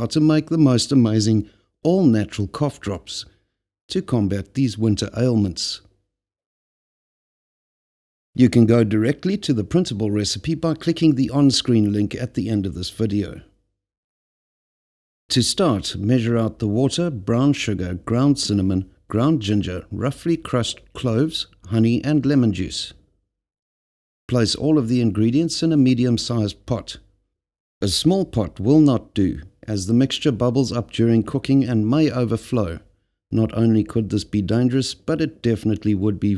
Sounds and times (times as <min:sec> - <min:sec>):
Speech: 0:00.0 - 0:03.3, 0:03.9 - 0:06.0, 0:08.4 - 0:13.6, 0:15.3 - 0:23.1, 0:24.3 - 0:27.1, 0:27.8 - 0:36.3.